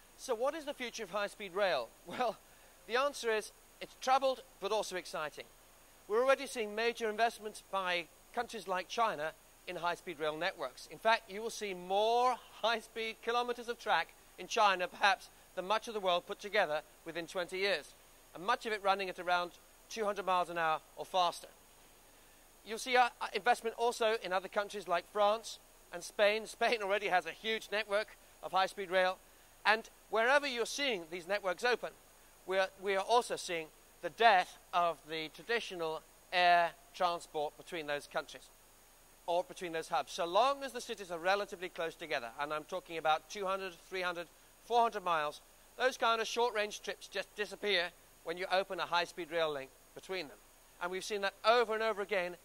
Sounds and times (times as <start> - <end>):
Speech: 0.2 - 5.5, 6.1 - 21.6, 22.6 - 38.5, 39.3 - 52.4.